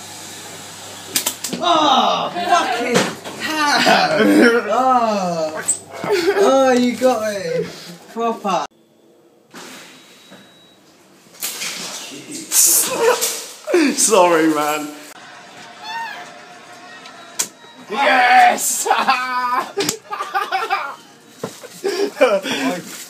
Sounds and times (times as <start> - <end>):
Speech: 6.3 - 8.7, 12.0 - 15.1.